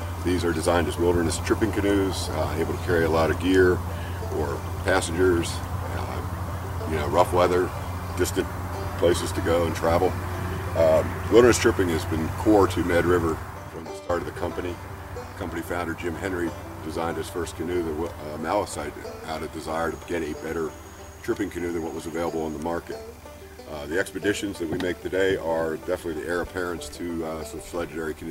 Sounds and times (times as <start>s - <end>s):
Music: 0.0s - 28.3s
Speech: 0.2s - 6.3s, 6.9s - 8.4s, 9.0s - 10.2s, 10.8s - 14.8s, 15.4s - 23.0s, 23.7s - 28.3s.